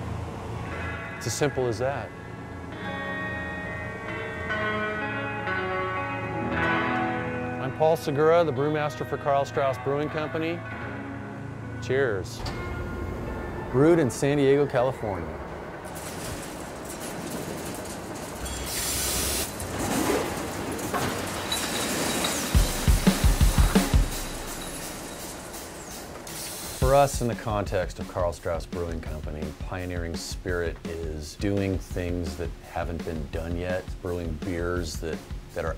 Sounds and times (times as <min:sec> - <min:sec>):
Speech: 0:01.2 - 0:02.1, 0:07.6 - 0:10.6, 0:11.8 - 0:12.4, 0:13.7 - 0:15.4, 0:26.8 - 0:35.7.